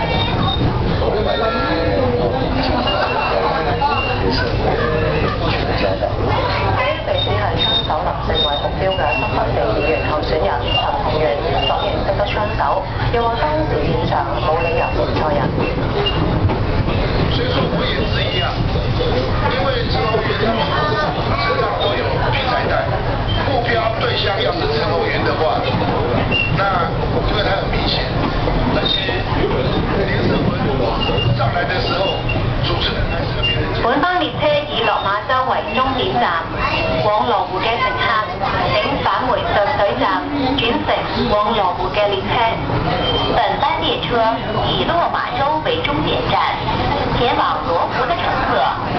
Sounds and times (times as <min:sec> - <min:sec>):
Speech: 0:00.0 - 0:15.8, 0:16.9 - 0:48.9.